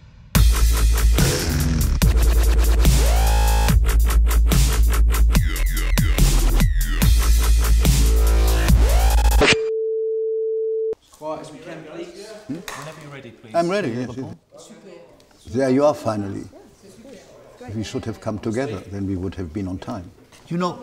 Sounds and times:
Music: 0:00.2 - 0:09.4.

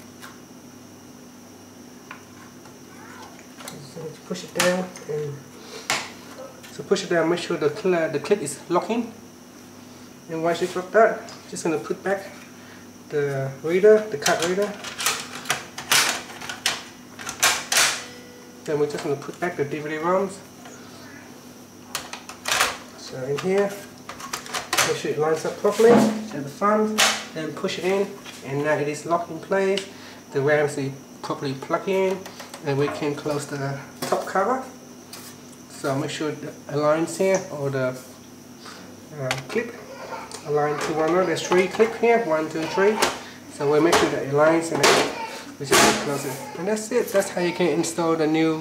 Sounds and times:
Inside, small room: 0:00.0 - 0:48.6
Speech: 0:03.6 - 0:05.4, 0:06.7 - 0:09.2, 0:10.3 - 0:12.4, 0:13.1 - 0:14.8, 0:18.7 - 0:20.4, 0:23.0 - 0:23.9, 0:24.8 - 0:34.8, 0:35.7 - 0:38.0, 0:39.1 - 0:39.8, 0:40.4 - 0:48.6.

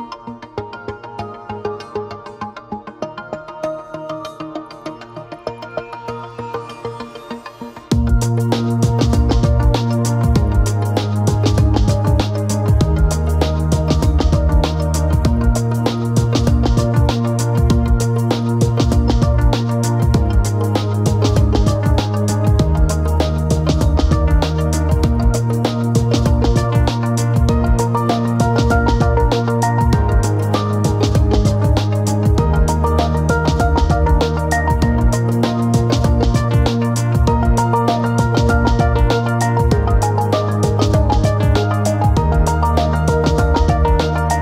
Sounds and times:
Music: 0:00.0 - 0:44.4.

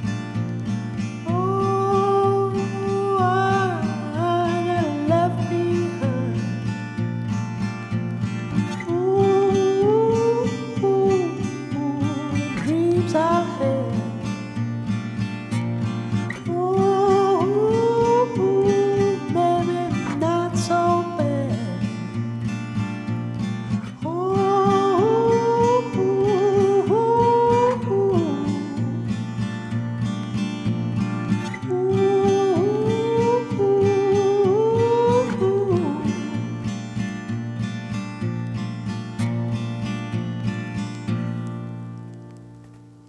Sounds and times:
Music: 0:00.0 - 0:43.0.

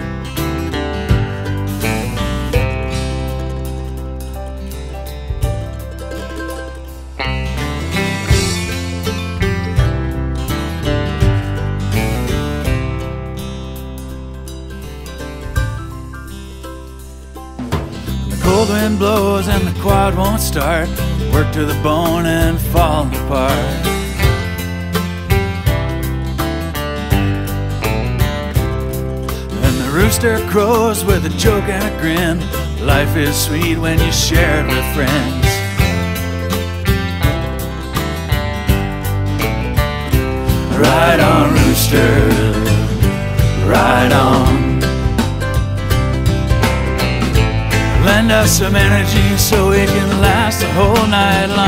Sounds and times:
Music: 0:00.0 - 0:51.6.

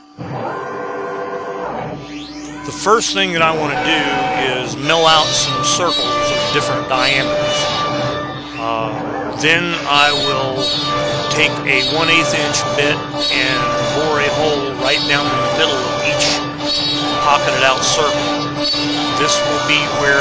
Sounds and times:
Speech: 0:02.6 - 0:07.7, 0:08.6 - 0:10.7, 0:11.3 - 0:16.4, 0:17.2 - 0:18.4, 0:19.2 - 0:20.2.

